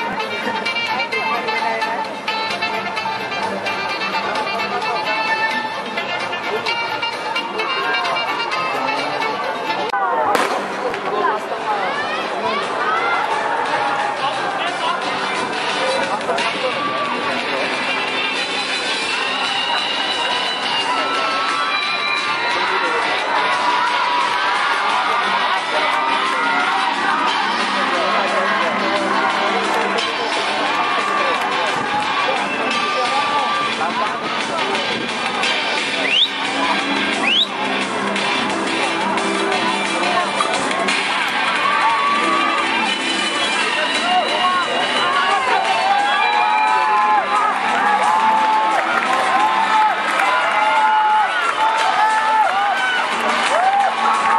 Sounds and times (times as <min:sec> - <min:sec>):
Speech: 0:00.0 - 0:50.8
Music: 0:00.0 - 0:54.3
Fireworks: 0:10.3 - 0:11.1.